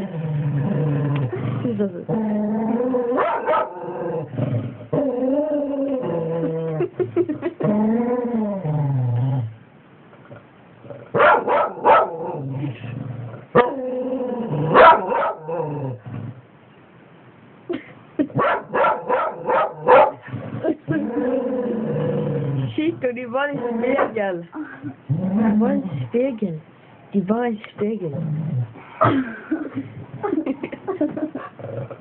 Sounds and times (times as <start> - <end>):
Bark: 3.2 - 3.8, 11.2 - 12.2, 14.8 - 15.5, 18.4 - 20.2.